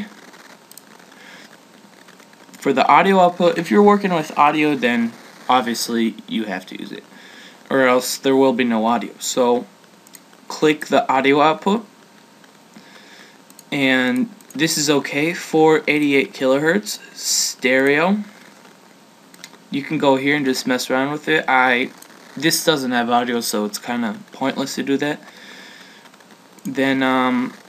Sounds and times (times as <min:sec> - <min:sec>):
Speech: 0:02.6 - 0:07.0, 0:07.7 - 0:09.7, 0:10.5 - 0:11.9, 0:13.7 - 0:18.3, 0:19.7 - 0:25.2, 0:26.7 - 0:27.6.